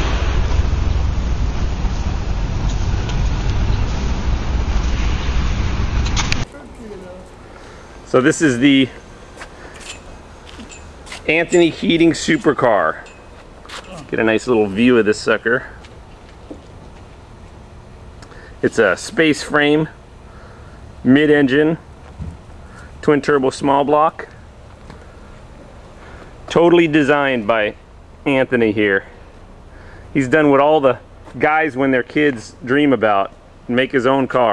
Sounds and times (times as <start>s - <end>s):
Speech: 6.5s - 7.3s, 8.1s - 9.0s, 11.2s - 13.1s, 13.8s - 15.8s, 18.6s - 20.0s, 21.0s - 21.8s, 23.0s - 24.3s, 26.5s - 29.1s, 30.2s - 34.5s.